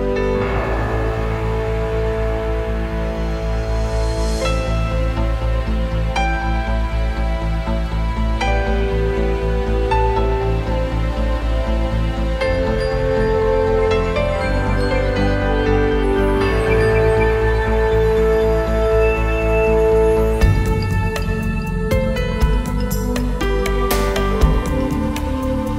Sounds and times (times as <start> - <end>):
Background music: 0.0 - 25.7.